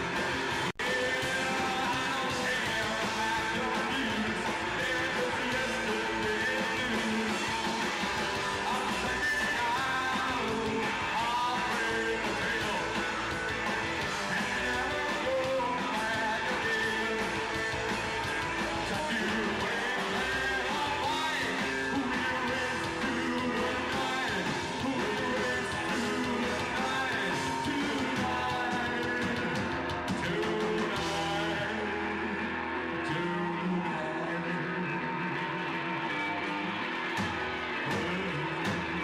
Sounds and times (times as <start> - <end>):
Rock and roll: 0.0 - 39.0.